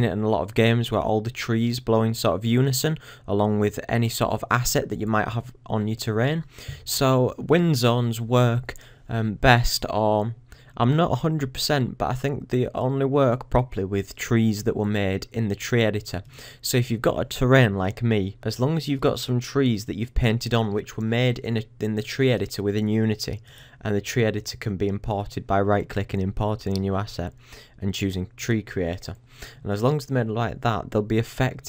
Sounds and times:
Speech: 0.0 - 31.6.

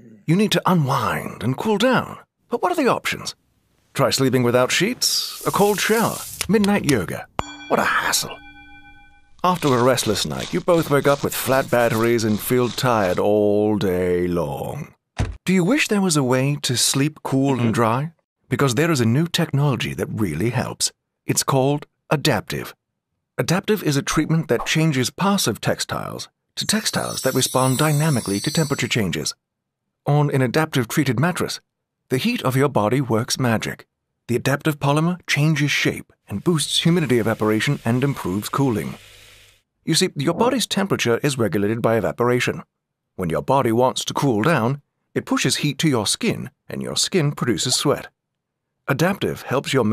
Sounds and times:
Speech: 0.0 - 3.4, 4.0 - 8.4, 9.5 - 22.8, 23.4 - 29.4, 30.1 - 39.0, 39.9 - 48.1, 48.9 - 49.9.

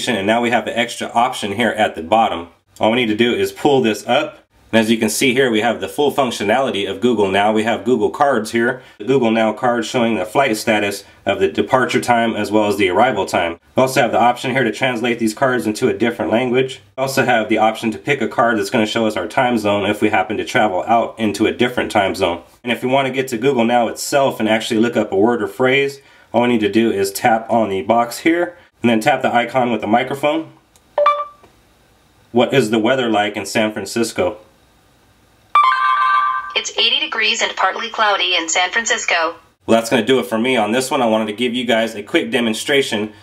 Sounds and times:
Speech: 0.0 - 30.6, 32.3 - 34.4, 36.6 - 43.2
Inside, small room: 0.0 - 43.2.

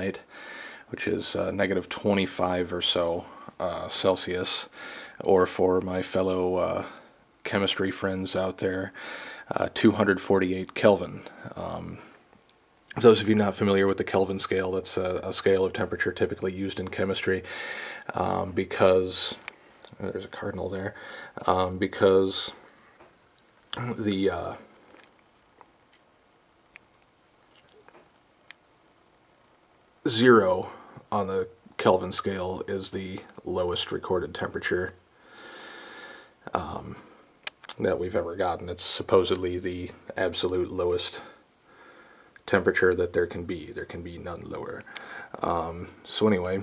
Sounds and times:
Speech: 0.0 - 0.3, 0.9 - 12.2, 12.9 - 17.5, 18.1 - 22.6, 23.7 - 24.7, 30.0 - 35.0, 36.4 - 41.4, 42.5 - 46.6.

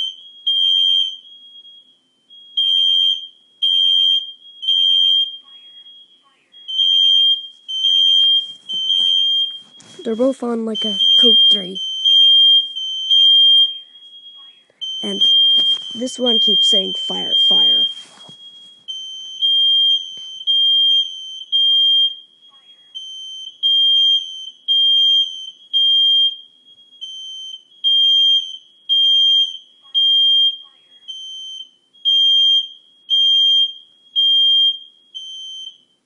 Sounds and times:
Fire alarm: 0.0 - 36.0
Smoke detector, smoke alarm: 0.0 - 36.0
Speech: 10.0 - 11.8, 15.0 - 17.9.

